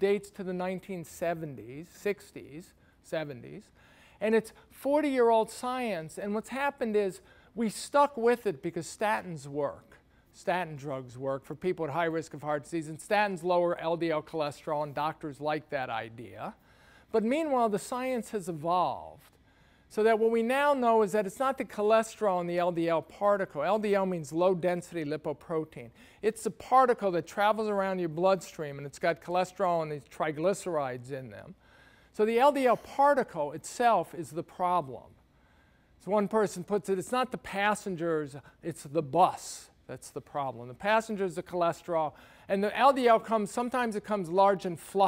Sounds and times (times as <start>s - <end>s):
Speech: 0.0s - 19.3s, 19.9s - 31.6s, 32.2s - 35.1s, 36.0s - 45.0s.